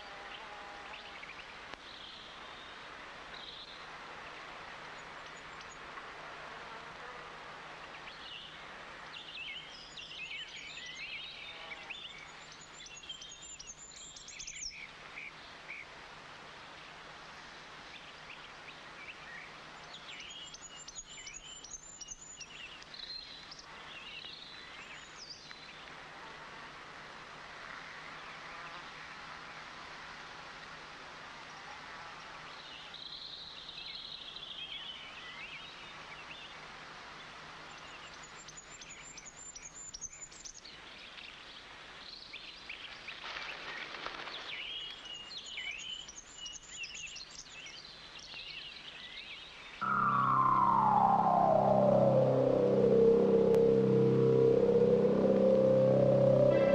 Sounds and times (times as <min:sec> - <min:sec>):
Outside, rural or natural: 0:00.0 - 0:56.7
Chirp, tweet: 0:08.0 - 0:15.4, 0:18.0 - 0:25.9, 0:44.4 - 0:49.6.